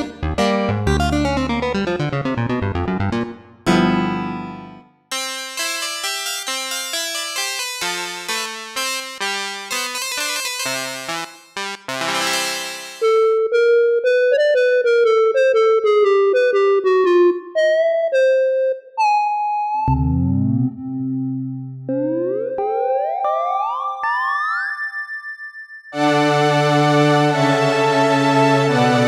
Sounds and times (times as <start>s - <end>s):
Synthesizer: 0.0s - 29.0s.